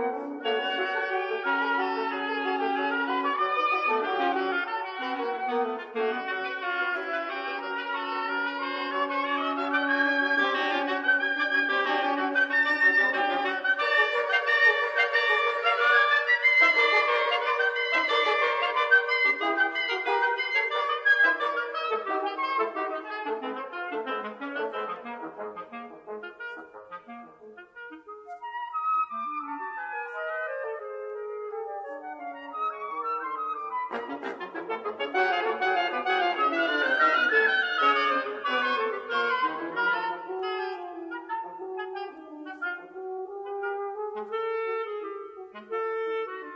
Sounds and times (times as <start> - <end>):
Flute: 0.0 - 46.5.